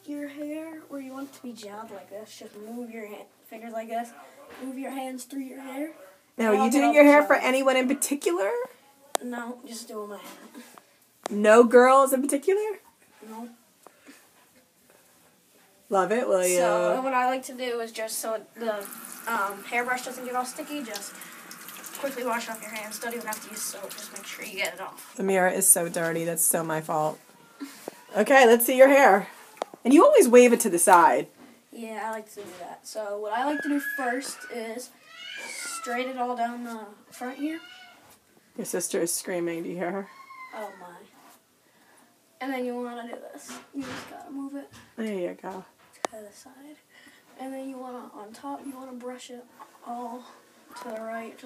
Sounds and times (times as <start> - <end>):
Child speech, kid speaking: 0.0 - 10.7, 12.2 - 13.6, 16.2 - 21.2, 21.8 - 25.1, 31.7 - 38.0, 40.1 - 41.2, 42.4 - 44.9, 45.5 - 46.8, 47.4 - 51.4
Inside, small room: 0.0 - 51.4.